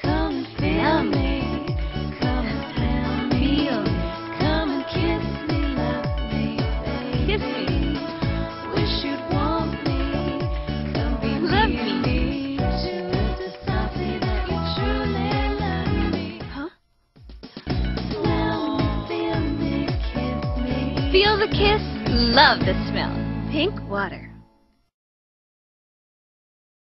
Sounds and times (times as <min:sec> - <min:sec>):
Music: 0:00.0 - 0:24.9
Speech: 0:21.2 - 0:24.3.